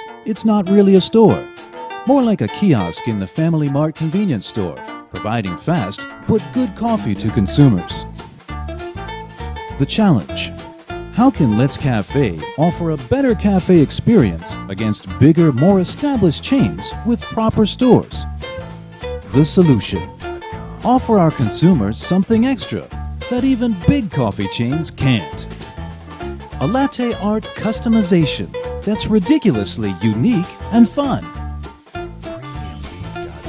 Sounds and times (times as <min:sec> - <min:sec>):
Music: 0:00.0 - 0:33.4
Speech: 0:00.3 - 0:01.5, 0:02.1 - 0:08.1, 0:09.8 - 0:18.2, 0:19.3 - 0:20.1, 0:20.8 - 0:25.5, 0:26.6 - 0:31.3.